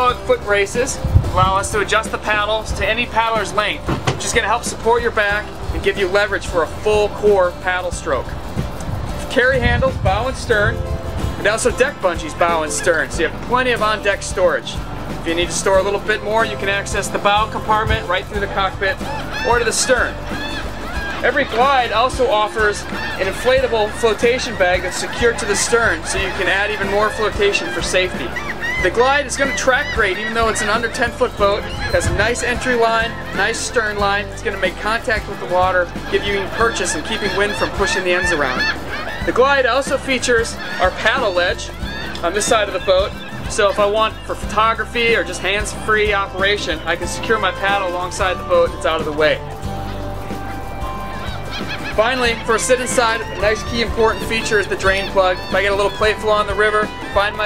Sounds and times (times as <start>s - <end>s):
Speech: 0.0s - 8.3s, 9.2s - 10.8s, 11.4s - 20.2s, 21.2s - 38.7s, 39.3s - 49.4s, 52.0s - 57.4s
Music: 0.0s - 57.4s.